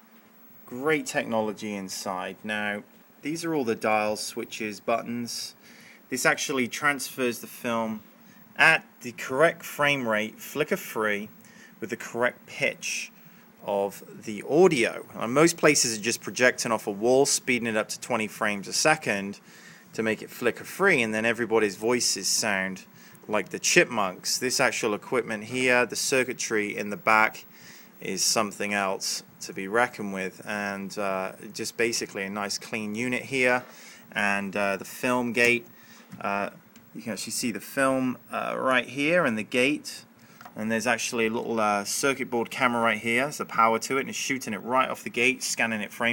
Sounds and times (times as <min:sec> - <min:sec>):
Speech: 0:00.7 - 0:46.1.